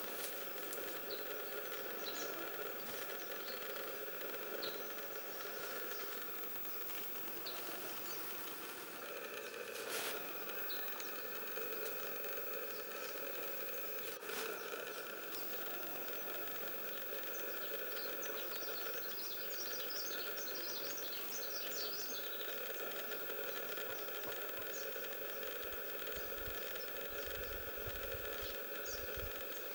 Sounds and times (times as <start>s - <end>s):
Bird: 1.0s - 3.8s, 17.2s - 25.1s.